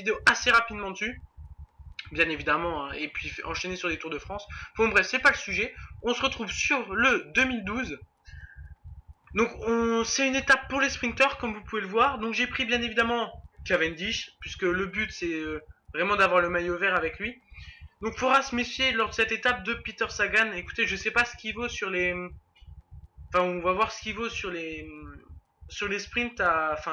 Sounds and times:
Speech: 0.0s - 1.2s, 2.0s - 8.0s, 9.4s - 22.3s, 23.4s - 26.9s.

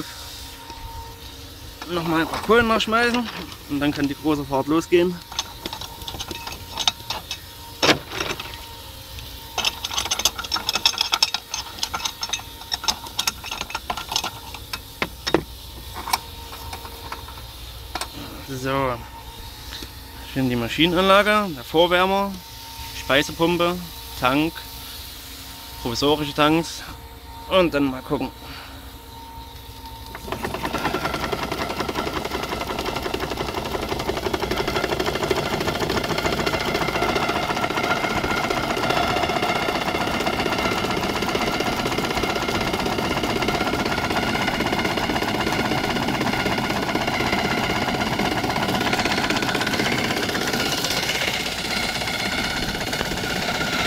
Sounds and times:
Speech: 1.8s - 5.2s, 18.2s - 19.0s, 20.3s - 22.4s, 23.0s - 24.6s, 25.8s - 28.4s.

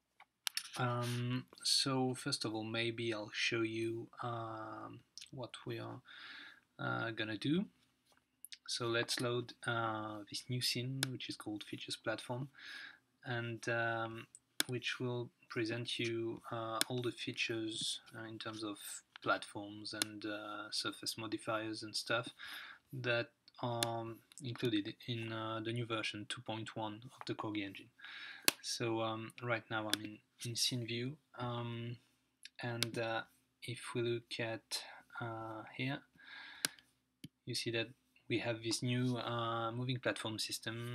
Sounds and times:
Speech: 0.6s - 6.1s, 6.8s - 7.7s, 8.6s - 12.6s, 13.2s - 22.4s, 23.0s - 28.0s, 28.6s - 36.1s, 37.5s - 40.9s.

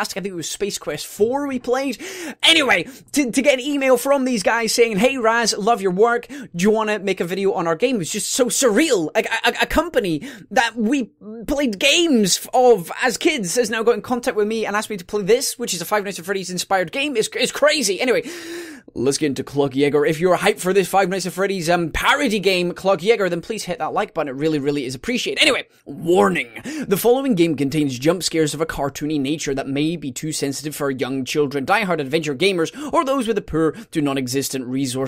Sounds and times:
Speech: 0.0s - 18.3s, 18.9s - 35.0s.

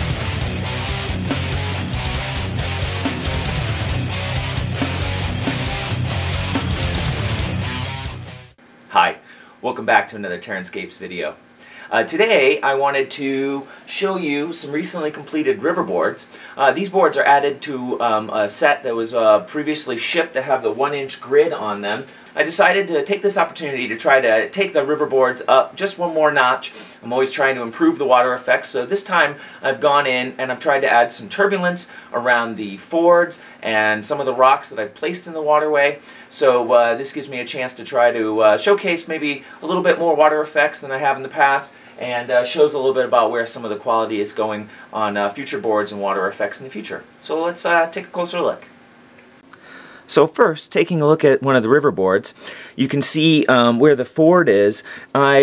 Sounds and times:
Speech: 8.9s - 48.7s, 50.1s - 55.4s.

